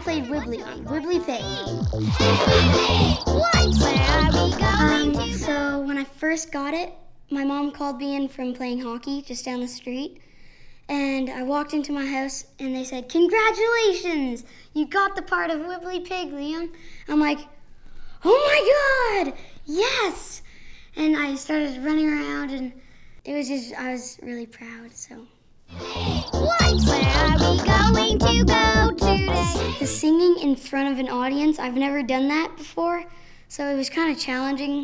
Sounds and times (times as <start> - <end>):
Speech: 0.0 - 1.6, 5.4 - 10.2, 10.9 - 17.6, 18.2 - 20.4, 21.0 - 25.3, 29.1 - 34.8
Music: 0.0 - 5.5, 25.7 - 30.0.